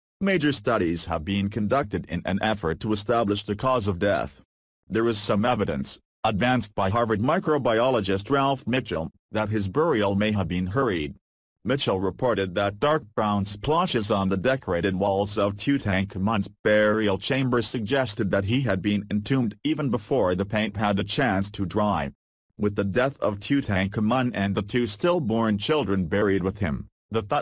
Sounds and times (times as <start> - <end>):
Speech synthesizer: 0.2 - 27.4.